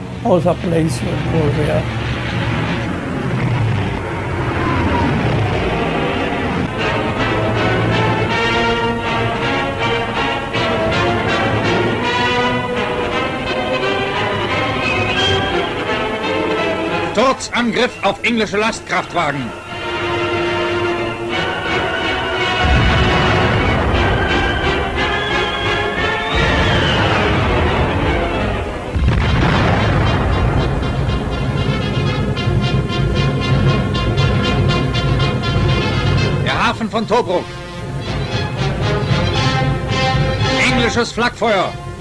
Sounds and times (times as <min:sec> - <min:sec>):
Music: 0:00.0 - 0:42.0
Speech: 0:00.2 - 0:01.8, 0:17.1 - 0:19.5, 0:36.4 - 0:37.4, 0:40.6 - 0:41.8.